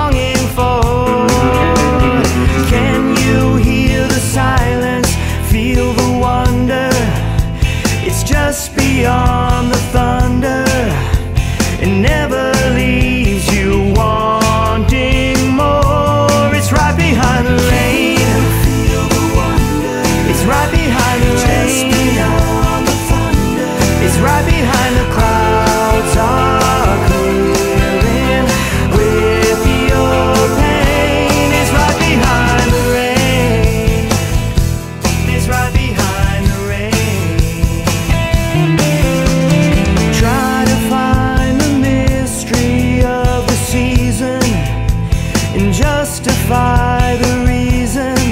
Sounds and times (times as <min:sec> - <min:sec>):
Music: 0:00.0 - 0:48.3.